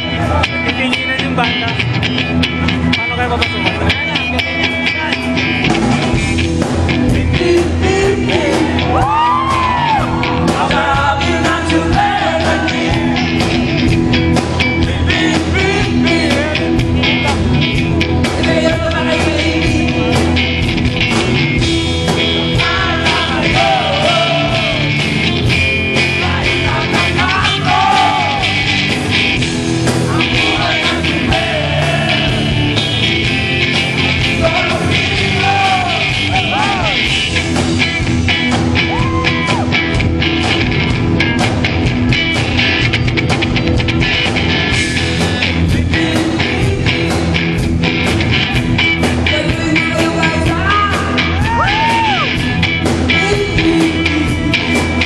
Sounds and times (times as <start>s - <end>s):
Music: 0.0s - 55.0s.